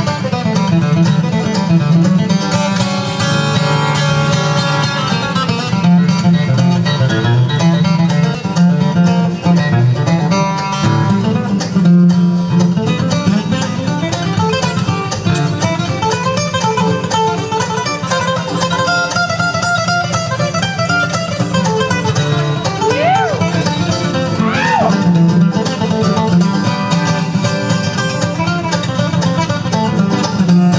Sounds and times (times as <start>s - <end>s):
Banjo: 0.0s - 30.7s
Bluegrass: 0.0s - 30.7s
Guitar: 0.0s - 30.7s.